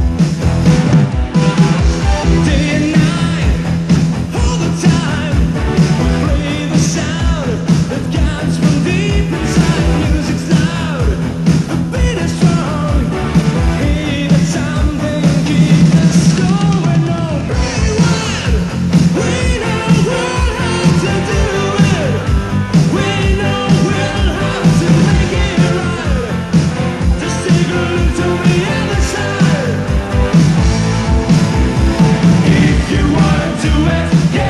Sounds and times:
Music: 0.0s - 34.4s.

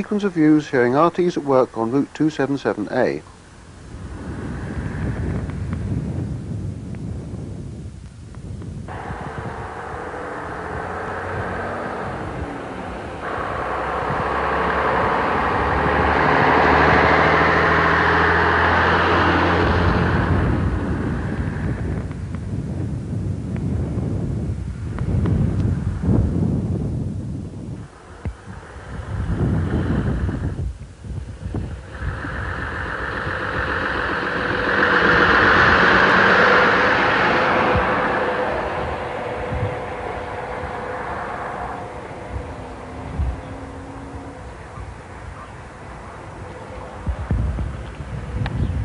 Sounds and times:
Vehicle: 0.0s - 48.8s.

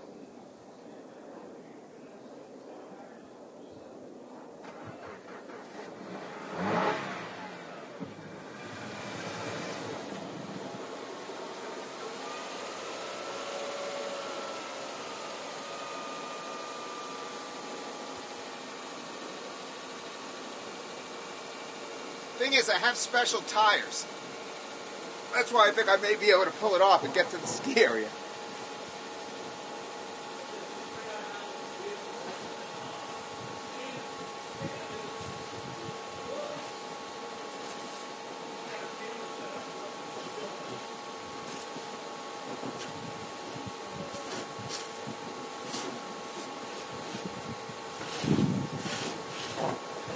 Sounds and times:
Car: 0.0s - 50.1s.

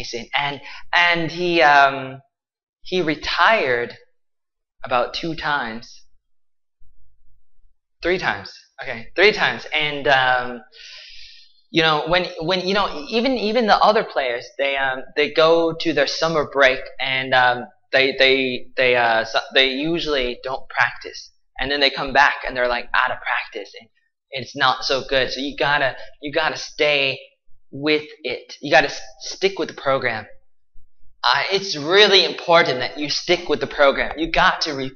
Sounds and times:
Speech: 0.0s - 2.2s, 2.9s - 4.0s, 4.8s - 6.0s, 8.0s - 23.8s, 24.4s - 30.4s, 31.2s - 34.9s
Inside, small room: 0.0s - 34.9s.

